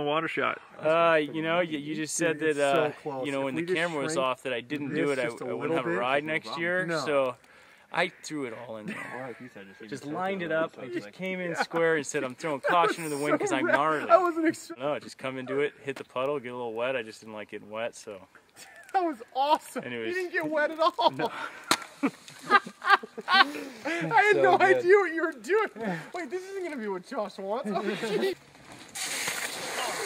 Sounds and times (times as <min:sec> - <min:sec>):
Speech: 0:00.0 - 0:07.4, 0:08.0 - 0:18.3, 0:23.9 - 0:28.4
Outside, rural or natural: 0:00.0 - 0:30.0.